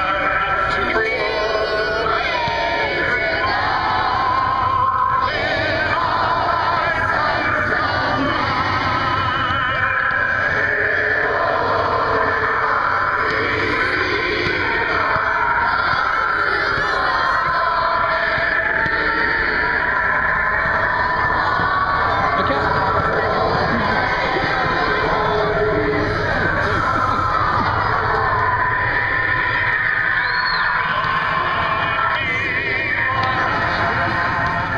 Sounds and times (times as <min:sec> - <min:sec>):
Speech: 0:00.0 - 0:03.3, 0:22.1 - 0:28.2
Music: 0:00.0 - 0:34.7.